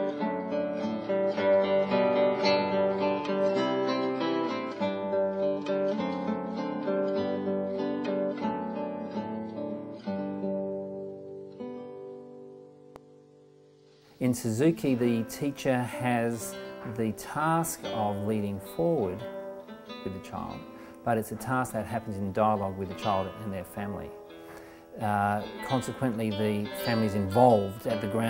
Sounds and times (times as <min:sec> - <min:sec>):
Acoustic guitar: 0:00.0 - 0:28.2
Strum: 0:00.0 - 0:28.2
Speech: 0:14.2 - 0:19.3, 0:20.0 - 0:24.2, 0:25.0 - 0:28.2.